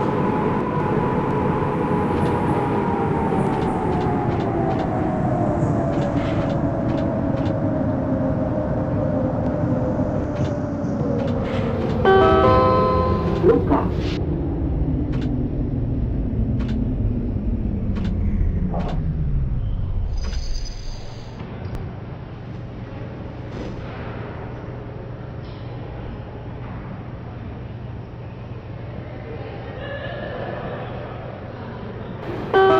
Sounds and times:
Subway, metro, underground: 0.0s - 32.7s
Train: 0.0s - 32.7s.

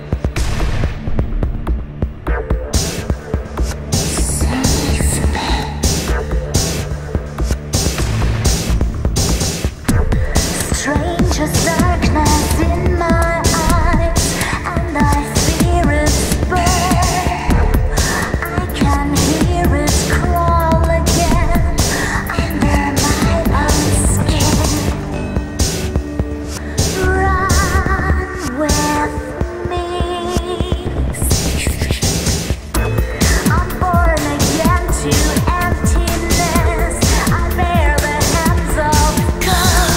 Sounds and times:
Music: 0.0s - 39.9s.

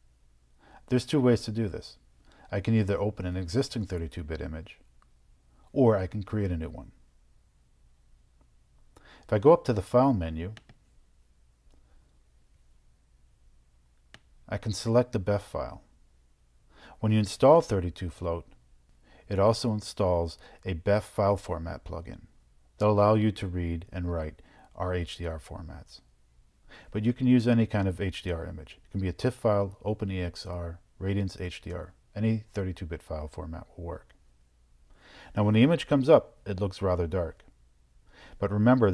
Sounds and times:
Inside, small room: 0.0s - 38.9s
Speech: 0.9s - 4.8s, 5.7s - 7.0s, 9.3s - 10.6s, 14.5s - 15.9s, 17.0s - 18.6s, 19.3s - 26.1s, 26.9s - 34.2s, 35.4s - 37.5s, 38.4s - 38.9s.

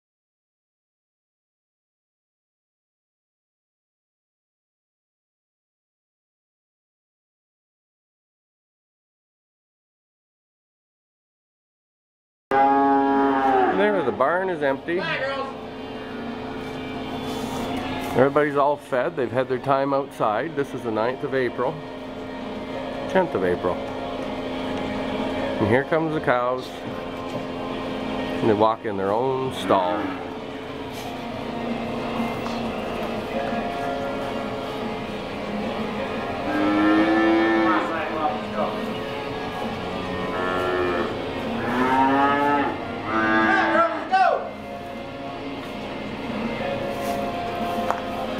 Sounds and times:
Speech: 13.7s - 15.6s, 18.2s - 21.8s, 23.1s - 23.8s, 25.6s - 26.8s, 28.4s - 30.2s.

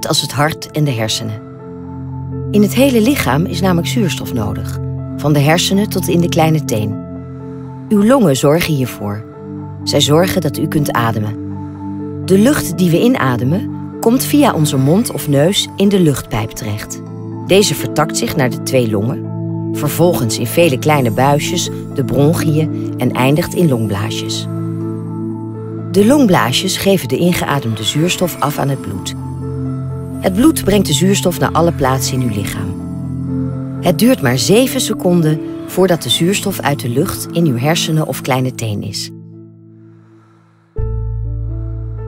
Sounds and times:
Speech: 0.0s - 1.4s, 2.6s - 7.0s, 7.9s - 9.2s, 9.9s - 11.4s, 12.3s - 19.2s, 19.8s - 24.5s, 26.0s - 29.2s, 30.2s - 32.8s, 33.8s - 39.1s
New-age music: 0.0s - 42.0s.

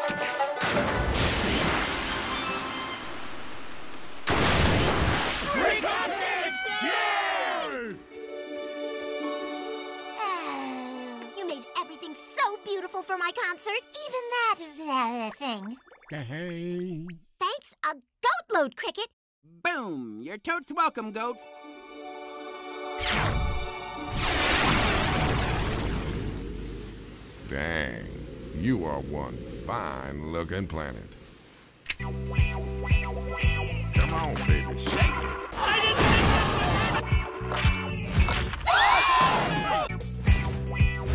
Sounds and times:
Music: 0.0s - 1.2s, 2.1s - 3.2s, 7.5s - 15.3s, 20.8s - 24.4s, 31.9s - 41.1s
Speech: 11.4s - 21.4s, 27.5s - 31.1s, 34.0s - 36.8s.

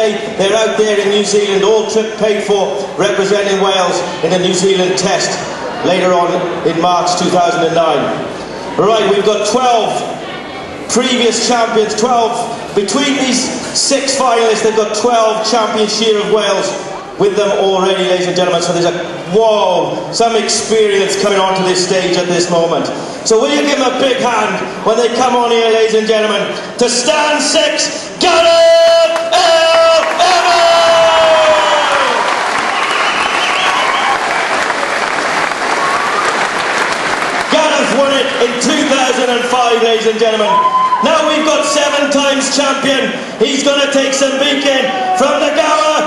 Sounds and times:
Speech: 0.0s - 31.1s, 37.5s - 46.0s.

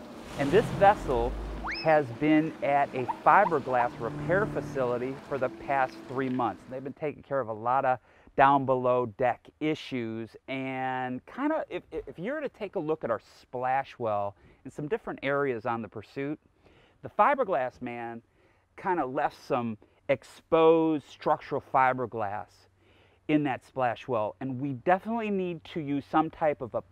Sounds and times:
Speech: 0.4s - 16.4s, 17.0s - 18.2s, 18.8s - 22.7s, 23.3s - 26.9s.

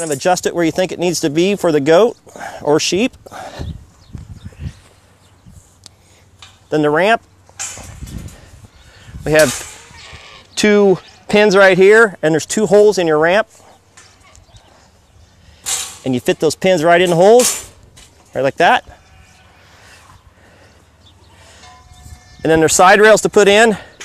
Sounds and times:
Speech: 0.0s - 3.2s, 6.7s - 7.2s, 9.2s - 9.6s, 10.6s - 13.5s, 16.0s - 17.5s, 18.3s - 18.9s, 22.4s - 23.9s.

